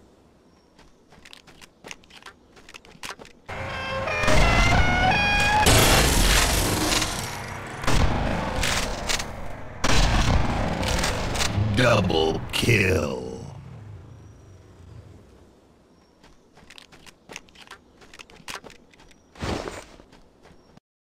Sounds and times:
Speech: 11.6s - 13.6s.

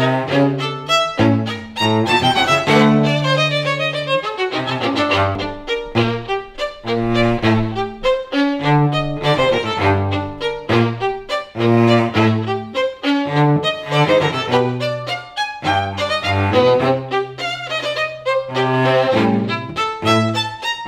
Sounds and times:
Cello: 0.0s - 20.8s
Violin, fiddle: 0.0s - 20.8s.

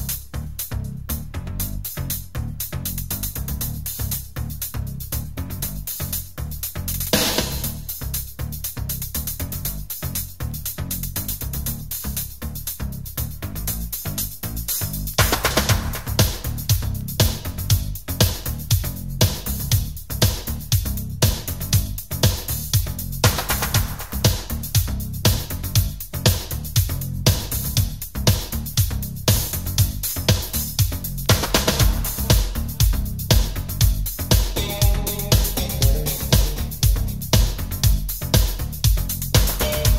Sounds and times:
Music: 0.0s - 39.9s.

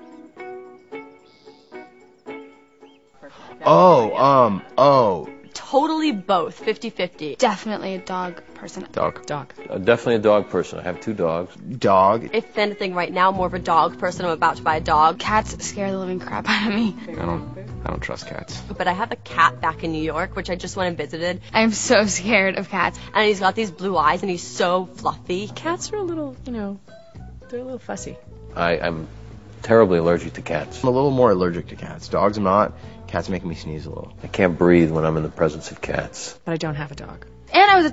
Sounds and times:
Music: 0.0s - 37.9s
Speech: 3.6s - 16.5s, 17.1s - 26.8s, 27.5s - 37.9s.

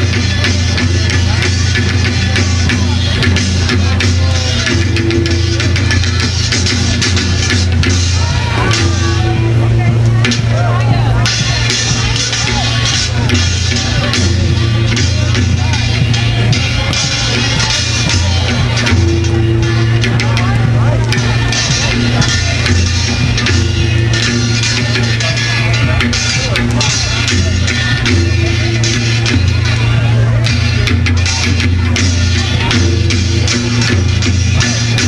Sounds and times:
Speech: 0.0s - 35.0s.

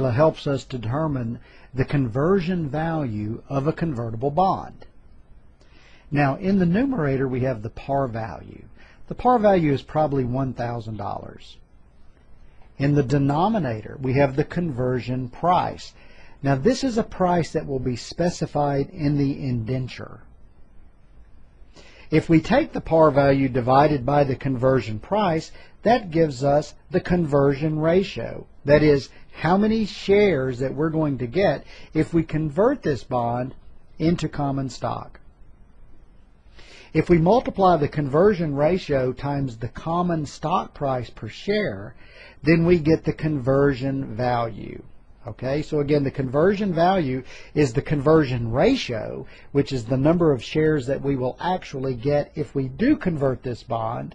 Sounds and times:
Speech: 0.0s - 4.9s, 6.1s - 11.6s, 12.8s - 20.3s, 22.1s - 35.2s, 36.9s - 54.1s.

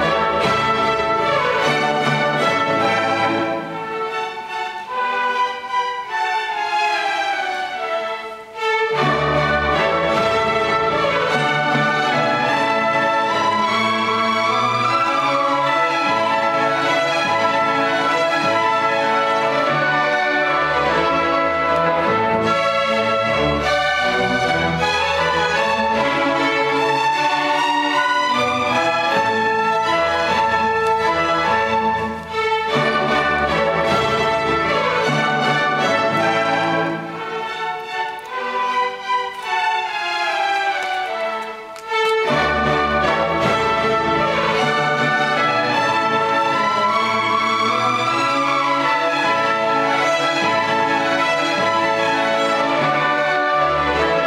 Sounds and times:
Music: 0.0s - 54.2s.

